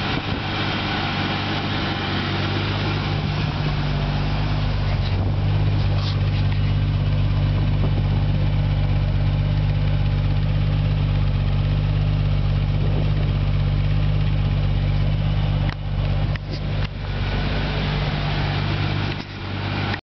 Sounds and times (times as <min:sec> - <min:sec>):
Idling: 0:00.0 - 0:20.0.